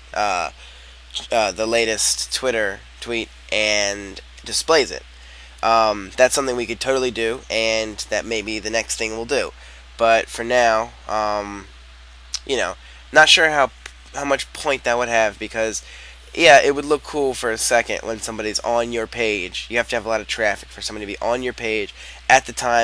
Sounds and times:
Speech: 0.2 - 0.5, 1.2 - 5.0, 5.6 - 11.7, 12.4 - 22.8.

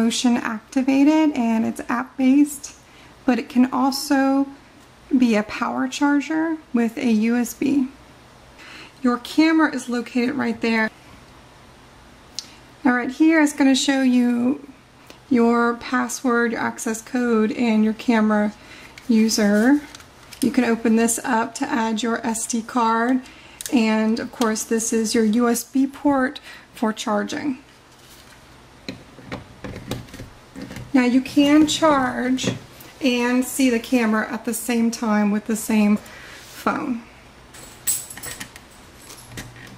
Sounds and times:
Speech: 0.0 - 8.0, 9.0 - 11.0, 12.8 - 14.7, 15.3 - 27.7, 30.9 - 37.1.

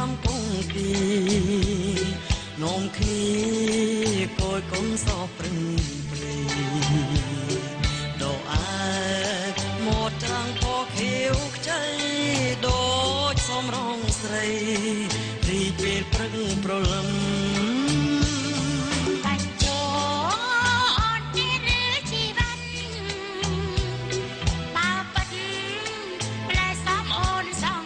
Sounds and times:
Music: 0.0 - 27.8
Female singing: 8.2 - 24.2, 24.8 - 27.8.

